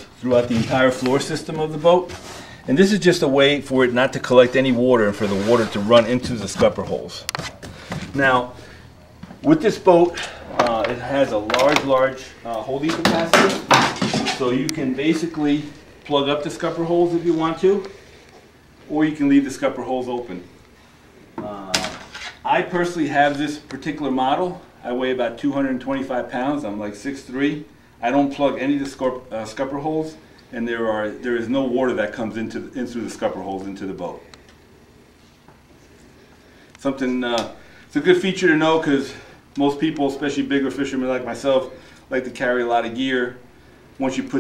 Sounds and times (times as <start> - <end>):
Speech: 0.0 - 7.3, 8.1 - 8.6, 9.4 - 18.0, 18.9 - 20.5, 21.4 - 34.3, 36.8 - 43.4, 44.0 - 44.4.